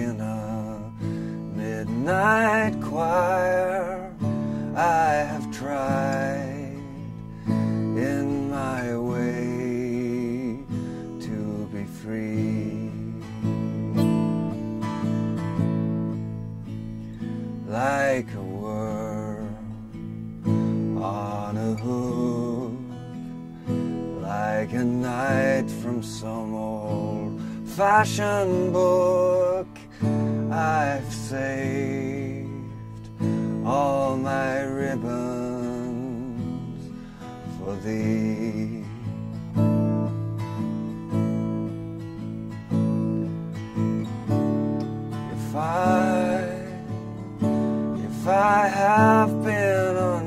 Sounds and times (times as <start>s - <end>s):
Acoustic guitar: 0.0s - 50.2s
Strum: 0.0s - 50.2s.